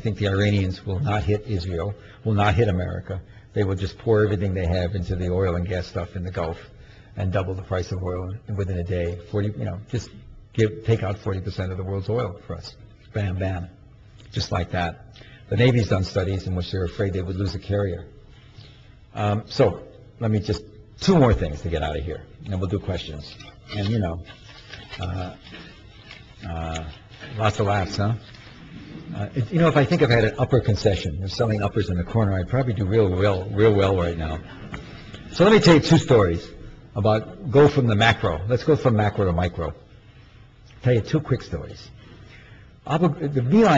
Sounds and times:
Male speech, man speaking: 0.0 - 13.8, 14.4 - 18.1, 19.2 - 24.3, 25.0 - 25.4, 26.4 - 28.2, 29.1 - 34.5, 35.4 - 39.8, 40.8 - 41.9, 42.9 - 43.7
Narration, monologue: 0.0 - 43.7.

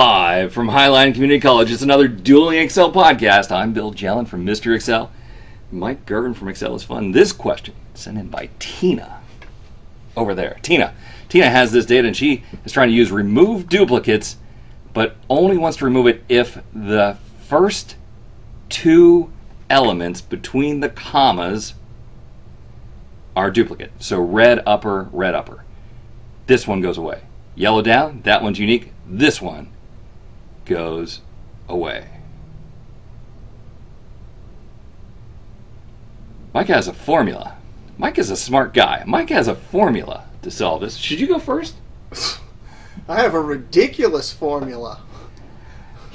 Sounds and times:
Speech: 0.0 - 5.1, 5.7 - 9.3, 10.2 - 14.4, 15.0 - 18.0, 18.7 - 21.8, 23.4 - 25.6, 26.5 - 29.7, 30.7 - 32.2, 36.6 - 42.4, 43.0 - 45.1
Inside, small room: 0.0 - 46.1.

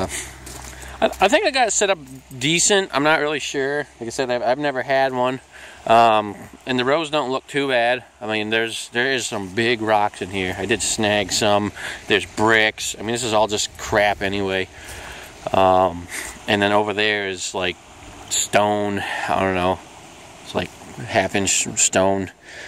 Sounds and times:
Speech: 0.0 - 0.3, 1.0 - 14.7, 15.4 - 19.8, 20.4 - 22.4.

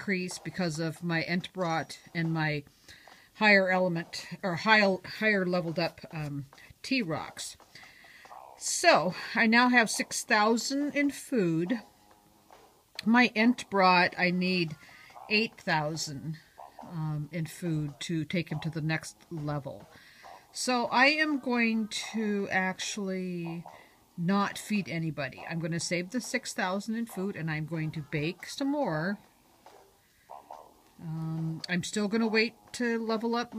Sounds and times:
Speech: 0.0 - 2.7, 3.4 - 7.6, 8.6 - 11.8, 13.0 - 19.9, 20.6 - 29.2, 31.0 - 33.5.

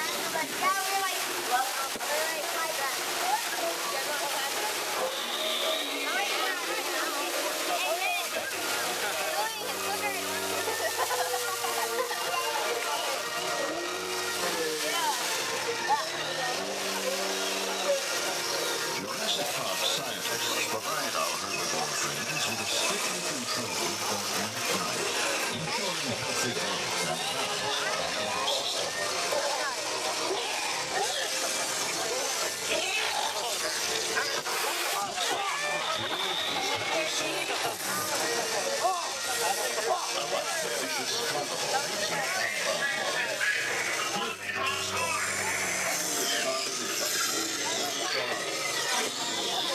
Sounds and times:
Outside, urban or manmade: 0.0 - 49.7
Speech: 0.0 - 49.7.

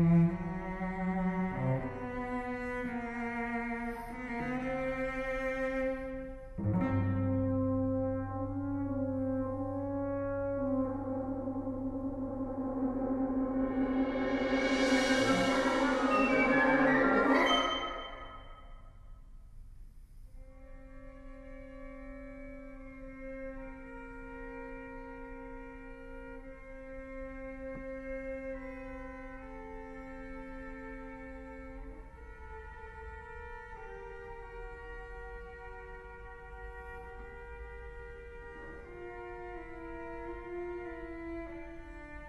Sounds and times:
Cello: 0.0 - 18.8, 20.4 - 42.2
Classical music: 0.0 - 18.8
Orchestra: 0.0 - 19.0, 20.4 - 42.2.

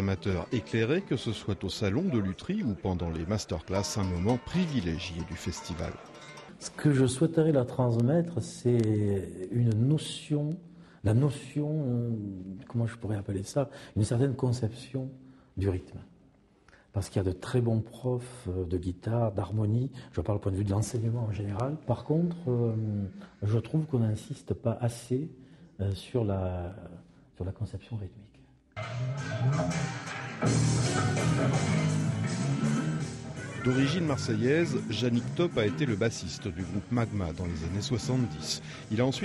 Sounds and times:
Speech: 0.0 - 6.0, 6.6 - 16.2, 16.9 - 28.6, 33.4 - 39.2.

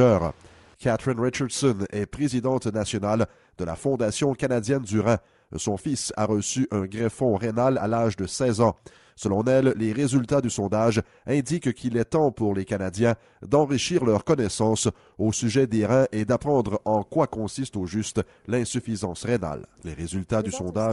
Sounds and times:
Speech: 0.0 - 20.9.

